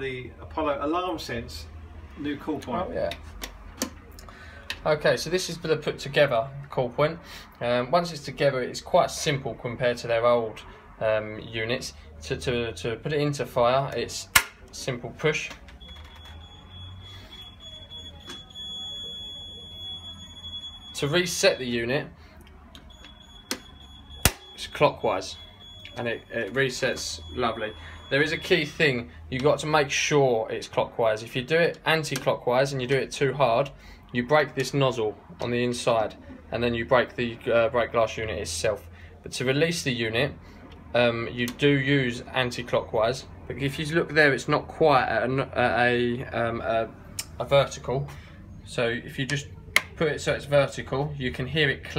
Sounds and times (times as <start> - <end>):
Speech: 0.0 - 3.2, 4.8 - 15.6, 17.8 - 22.7, 24.6 - 48.1, 48.7 - 51.9
Fire alarm: 15.8 - 21.9, 22.8 - 28.8.